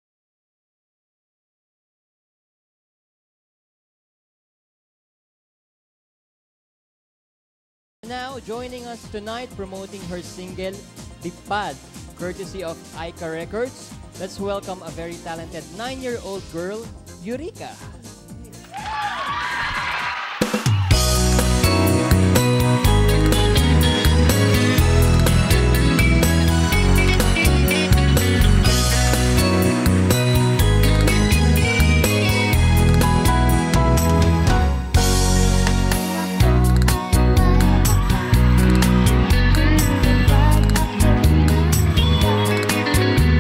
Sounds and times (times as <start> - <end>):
Music: 8.0 - 43.4.